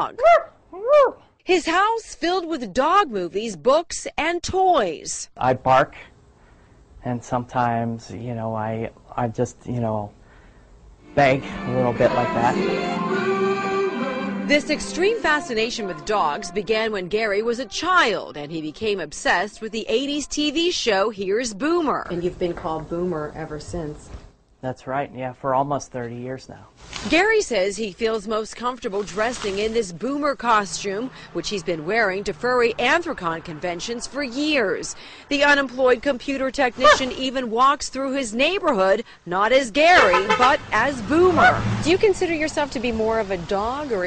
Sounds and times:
Music: 11.0s - 19.8s
Speech: 11.2s - 12.7s, 24.6s - 44.0s.

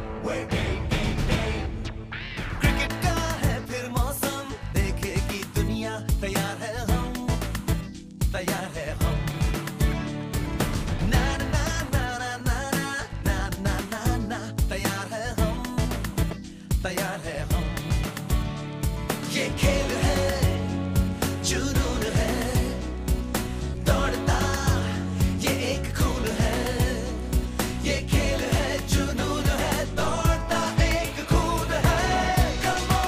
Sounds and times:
Pop music: 0.0s - 33.0s.

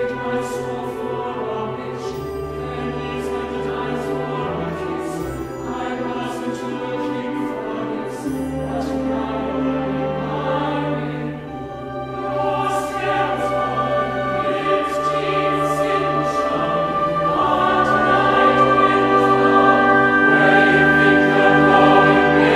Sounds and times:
Choir: 0.0s - 22.5s
Orchestra: 0.0s - 22.5s.

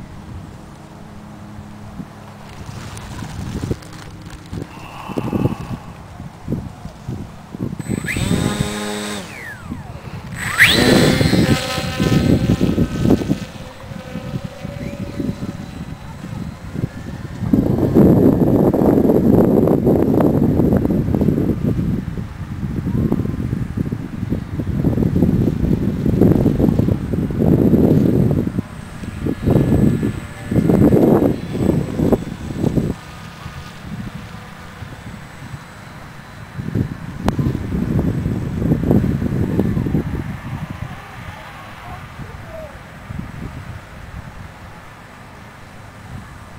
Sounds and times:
Outside, rural or natural: 0.0s - 46.5s.

